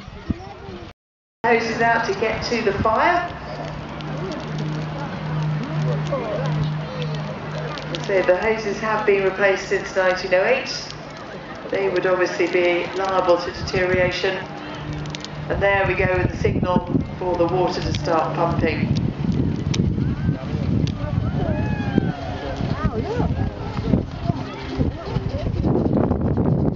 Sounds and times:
Speech: 0:00.0 - 0:03.4, 0:04.2 - 0:11.0, 0:11.6 - 0:14.5, 0:15.5 - 0:19.0.

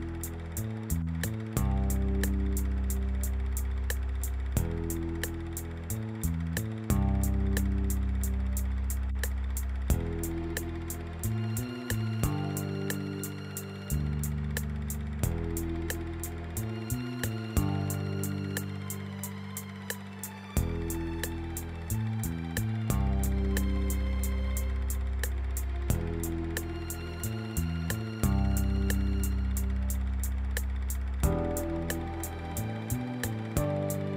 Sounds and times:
Music: 0:00.0 - 0:34.1.

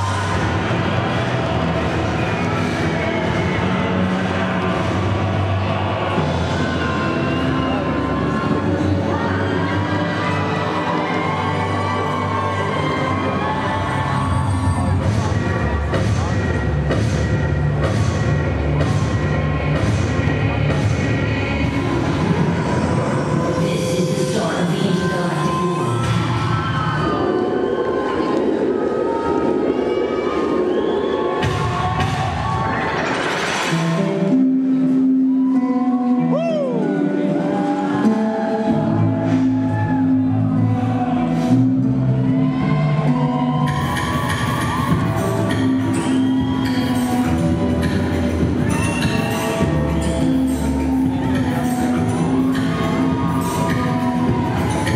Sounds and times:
Music: 0:00.0 - 0:54.9.

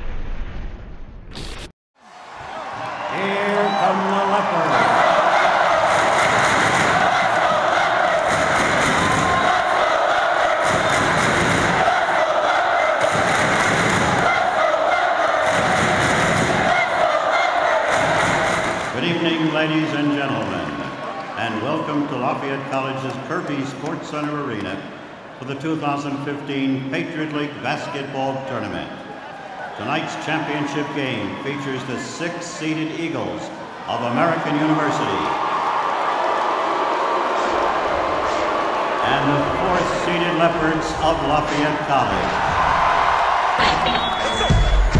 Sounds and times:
Speech: 0:03.1 - 0:05.0, 0:19.0 - 0:29.0, 0:29.8 - 0:35.4, 0:39.0 - 0:42.4.

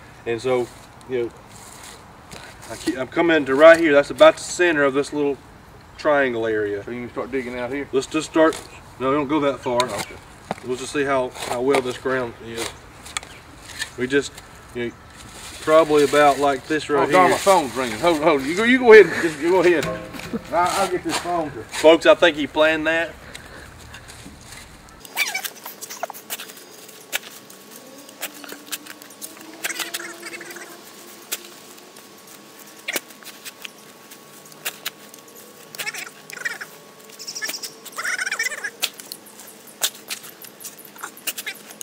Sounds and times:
Outside, rural or natural: 0:06.9 - 0:41.8.

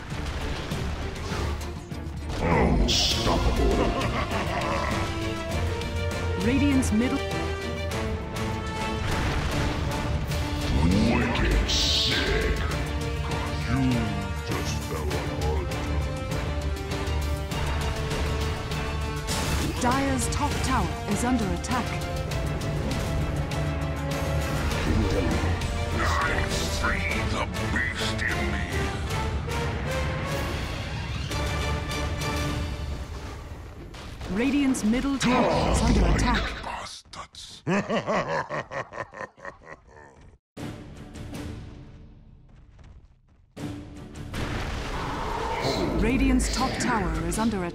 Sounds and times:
Music: 0:00.0 - 0:36.0, 0:40.6 - 0:47.7
Speech: 0:26.0 - 0:28.8, 0:34.3 - 0:37.6, 0:46.0 - 0:47.7.

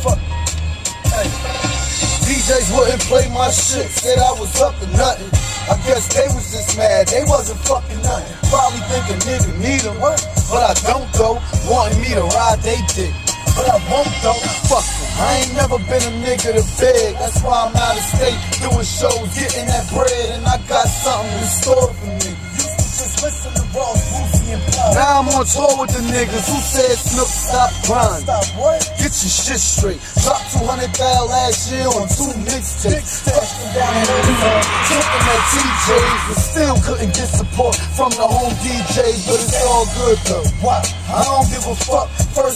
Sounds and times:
Music: 0:00.0 - 0:42.5.

